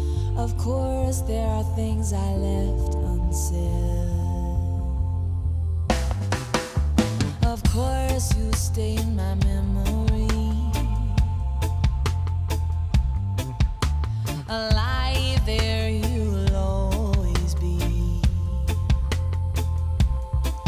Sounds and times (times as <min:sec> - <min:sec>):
Music: 0:00.0 - 0:20.6.